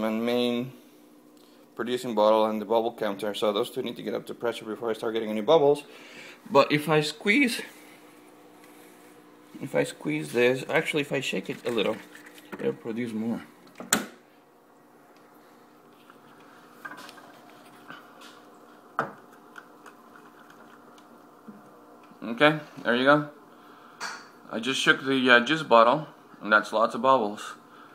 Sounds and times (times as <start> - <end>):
Speech: 0.0 - 0.8, 1.8 - 5.9, 6.5 - 7.7, 9.6 - 13.5, 22.2 - 23.4, 24.5 - 27.6.